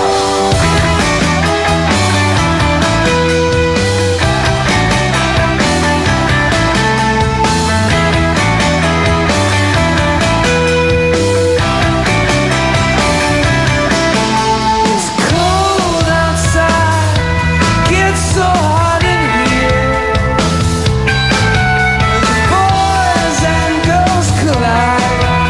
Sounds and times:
Music: 0.0 - 25.4.

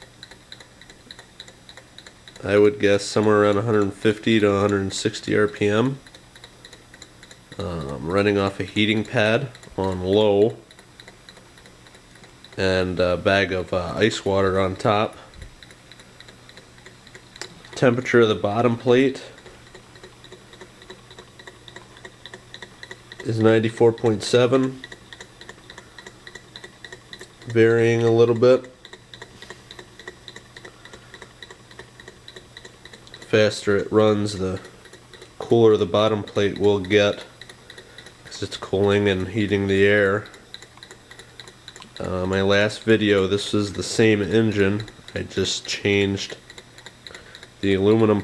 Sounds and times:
Speech: 2.4 - 6.0, 7.6 - 10.6, 12.6 - 15.3, 17.8 - 19.4, 23.2 - 24.8, 27.5 - 28.8, 33.3 - 34.7, 35.4 - 37.3, 38.3 - 40.3, 42.0 - 46.4, 47.6 - 48.2.

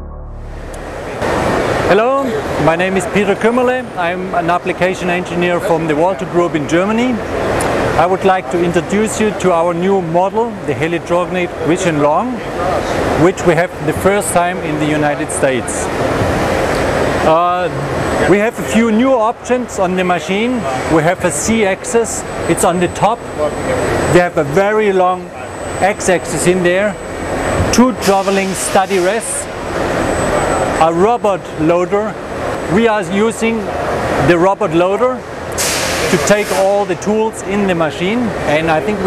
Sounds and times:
Speech: 1.9 - 7.2, 8.0 - 15.9, 17.2 - 27.0, 27.7 - 29.5, 30.8 - 35.2, 36.1 - 39.0.

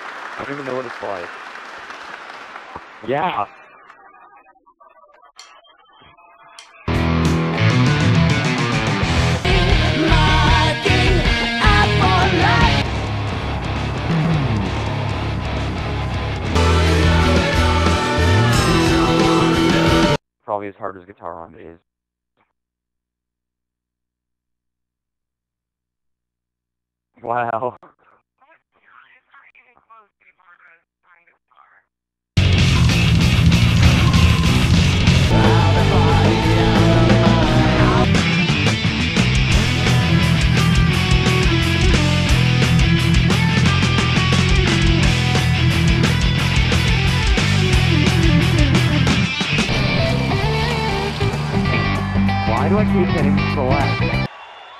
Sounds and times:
Speech: 0.4 - 1.3, 3.0 - 6.0, 20.5 - 21.8, 27.2 - 31.8, 52.5 - 54.0
Electric guitar: 6.9 - 20.2, 32.4 - 54.3.

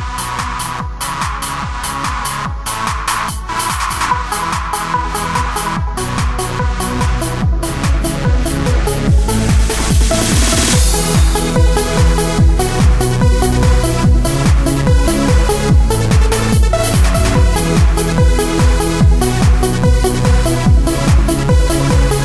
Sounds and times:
Techno: 0.0 - 22.2.

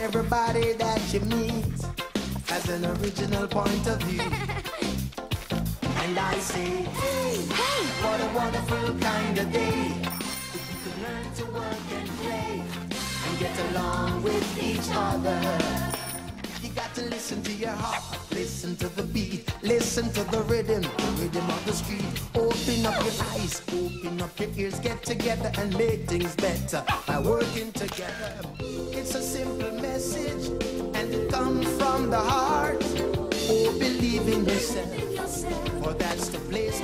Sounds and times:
Music: 0.0 - 36.8.

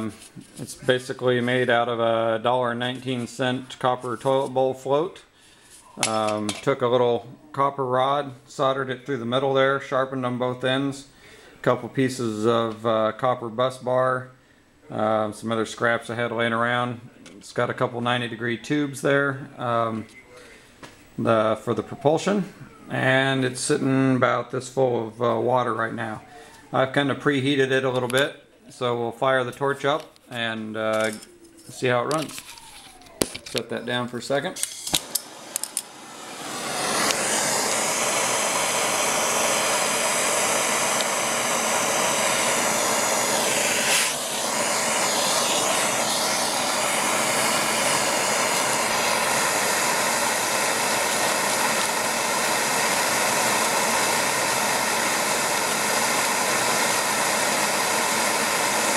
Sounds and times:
Speech: 0.0 - 5.3, 6.0 - 20.5, 21.2 - 32.4, 33.6 - 34.6.

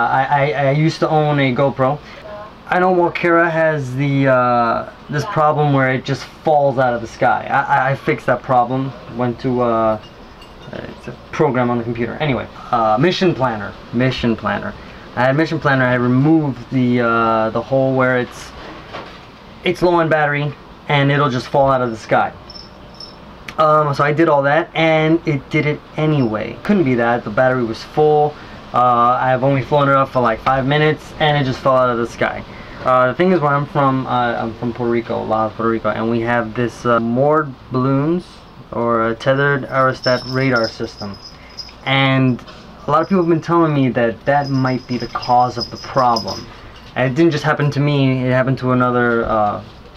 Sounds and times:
Speech: 0.0 - 10.0, 10.7 - 18.6, 19.6 - 22.4, 23.5 - 49.7
Inside, small room: 0.0 - 49.9.

